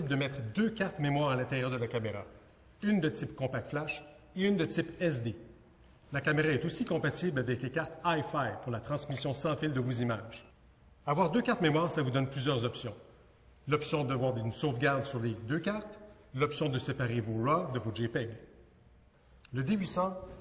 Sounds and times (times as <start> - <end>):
Speech: 0.0 - 5.5, 6.1 - 13.0, 13.7 - 18.5, 19.4 - 20.4.